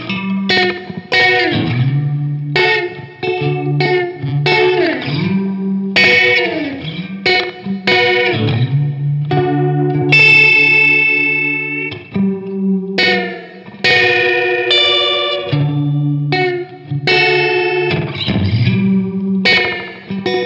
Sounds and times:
Effects unit: 0:00.0 - 0:20.4
Guitar: 0:00.0 - 0:20.4
Inside, small room: 0:00.0 - 0:20.4.

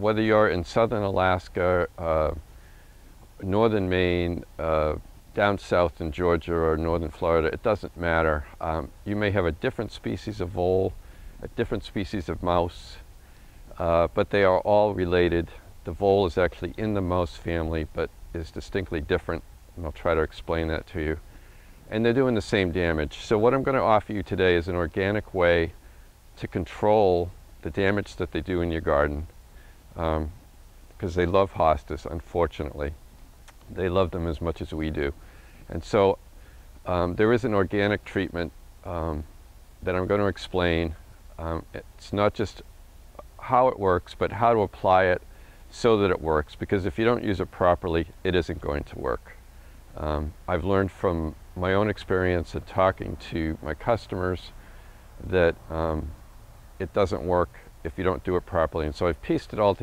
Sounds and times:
Speech: 0:00.0 - 0:02.4, 0:03.4 - 0:13.1, 0:13.7 - 0:21.2, 0:21.9 - 0:25.8, 0:26.4 - 0:29.3, 0:30.0 - 0:30.4, 0:31.0 - 0:33.0, 0:33.6 - 0:36.2, 0:36.9 - 0:49.4, 0:50.0 - 0:54.6, 0:55.2 - 0:56.2, 0:56.8 - 0:59.8.

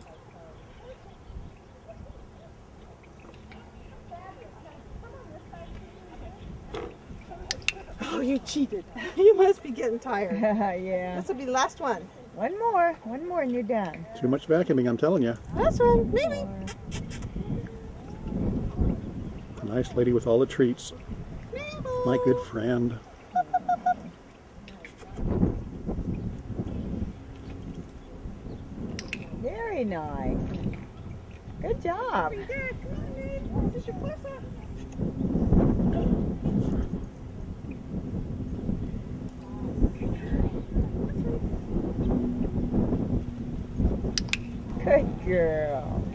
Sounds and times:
Outside, urban or manmade: 0:00.0 - 0:46.1.

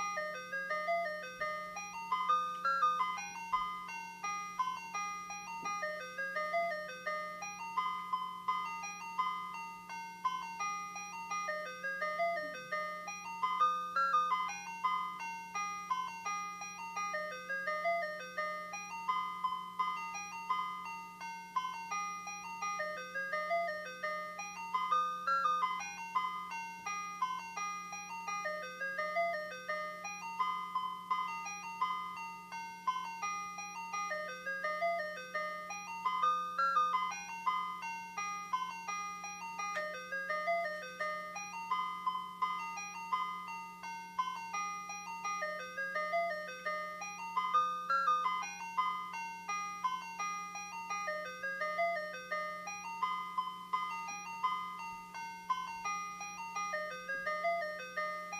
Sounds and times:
Ice cream truck, ice cream van: 0:00.0 - 0:58.3
Inside, small room: 0:00.0 - 0:58.3
Music: 0:00.0 - 0:58.3.

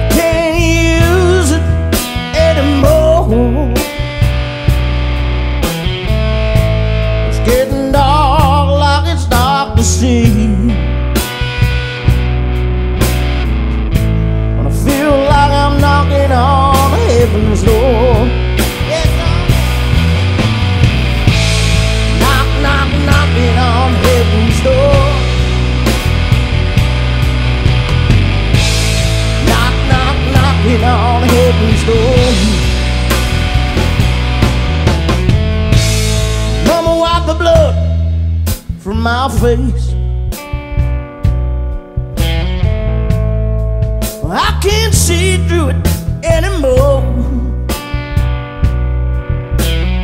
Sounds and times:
Music: 0:00.0 - 0:50.0.

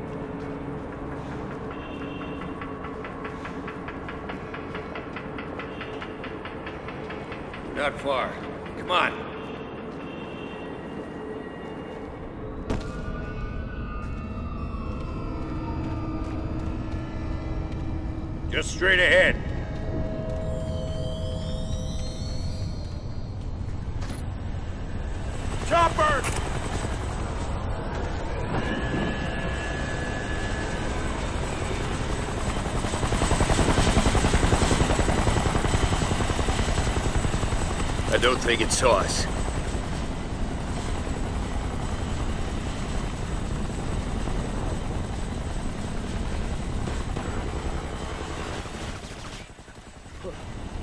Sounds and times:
Speech: 0:25.7 - 0:26.3, 0:38.1 - 0:39.3.

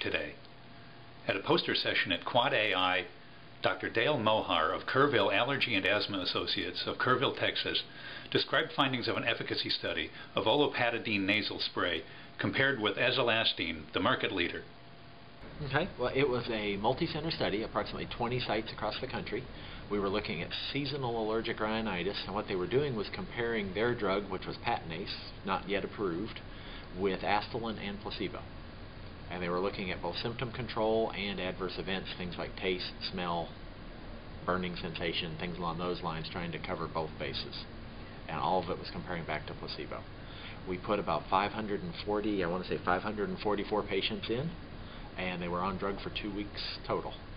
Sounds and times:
Speech: 0:00.0 - 0:00.4, 0:01.2 - 0:14.7, 0:15.5 - 0:28.5, 0:29.3 - 0:33.6, 0:34.4 - 0:37.7, 0:38.3 - 0:44.6, 0:45.2 - 0:47.2.

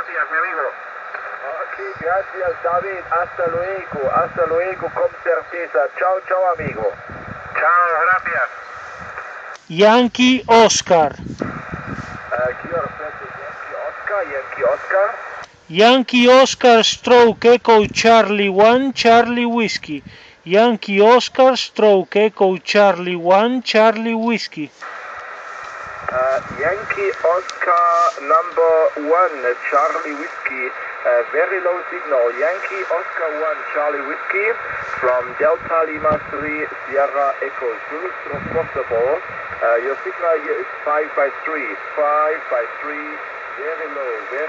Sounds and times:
Speech: 0:00.0 - 0:00.8, 0:01.4 - 0:07.0, 0:07.6 - 0:08.5, 0:09.7 - 0:11.2, 0:12.3 - 0:24.8, 0:26.2 - 0:44.4
Radio: 0:00.0 - 0:44.4.

